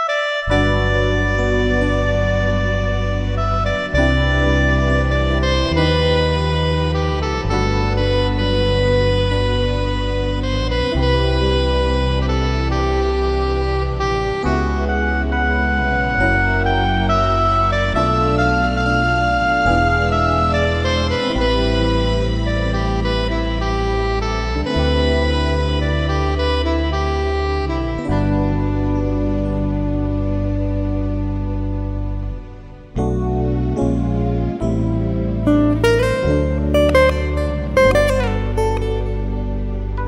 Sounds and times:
Strum: 0.5s - 40.0s.

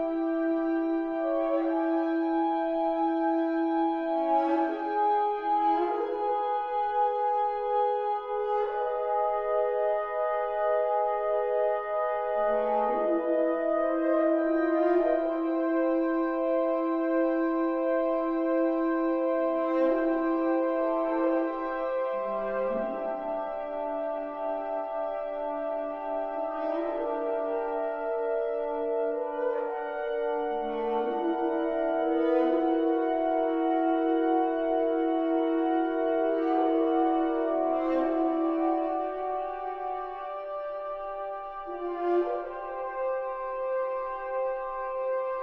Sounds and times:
French horn: 0.0s - 45.4s.

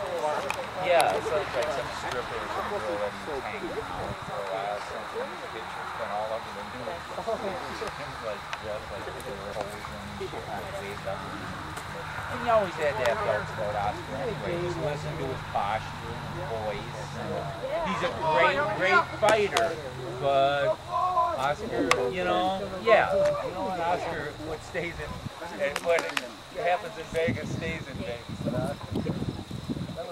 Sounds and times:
Speech: 0.0s - 30.1s.

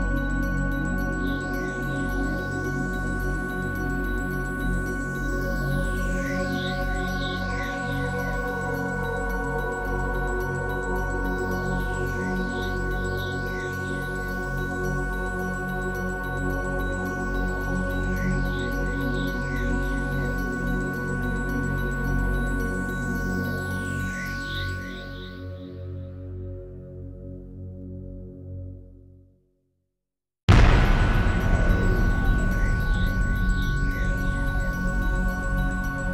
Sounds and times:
Music: 0.0s - 29.6s, 30.5s - 36.1s.

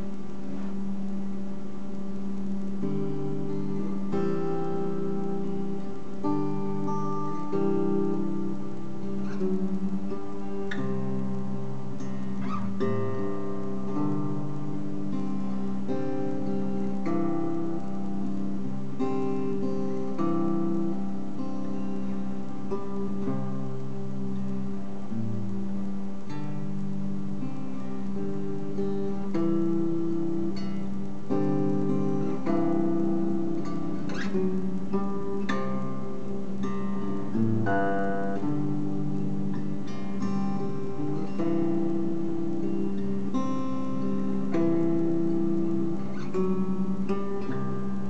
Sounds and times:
Acoustic guitar: 0.0s - 48.1s.

